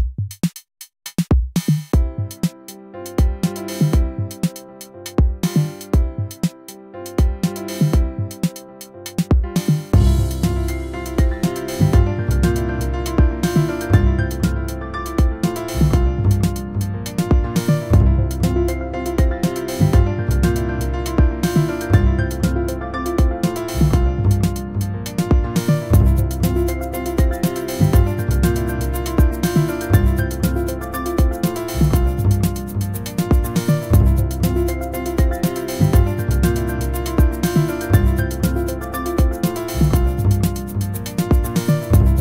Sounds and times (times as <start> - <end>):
Music: 0.0 - 42.2.